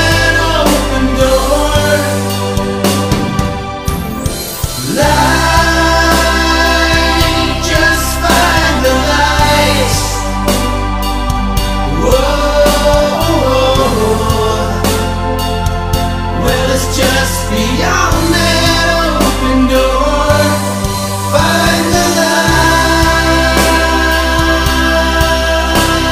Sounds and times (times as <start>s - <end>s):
Music: 0.0s - 26.1s.